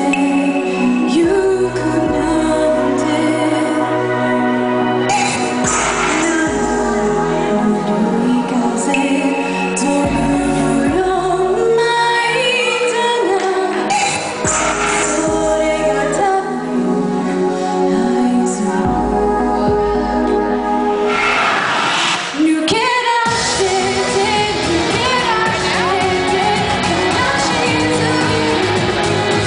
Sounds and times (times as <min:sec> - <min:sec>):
Female singing: 0:00.0 - 0:04.2, 0:05.1 - 0:20.5, 0:22.4 - 0:29.4
Music: 0:00.0 - 0:29.4.